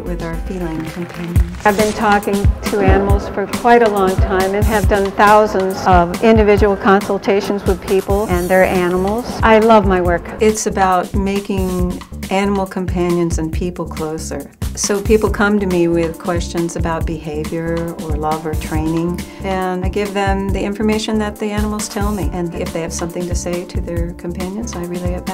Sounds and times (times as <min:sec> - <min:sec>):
Music: 0:00.0 - 0:25.3
Speech: 0:00.0 - 0:25.3.